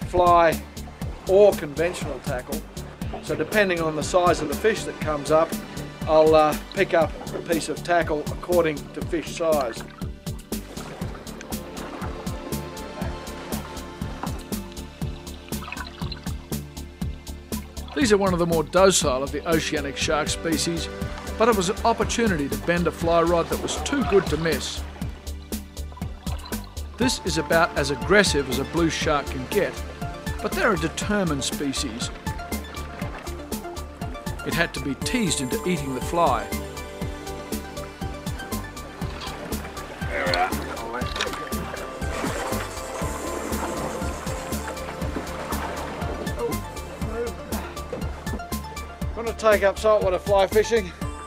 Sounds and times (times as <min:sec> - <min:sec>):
Speech: 0:00.0 - 0:00.6, 0:01.3 - 0:02.6, 0:03.2 - 0:05.5, 0:06.1 - 0:09.8, 0:18.0 - 0:24.8, 0:27.0 - 0:29.8, 0:30.4 - 0:32.1, 0:34.4 - 0:36.5, 0:49.2 - 0:50.9
Music: 0:00.0 - 0:51.2.